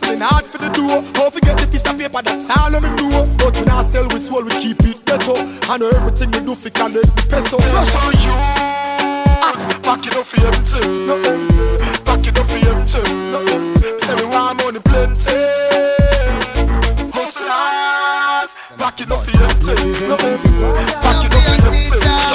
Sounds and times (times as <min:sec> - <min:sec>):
Hip hop music: 0:00.0 - 0:22.3
Reggae: 0:00.0 - 0:22.3.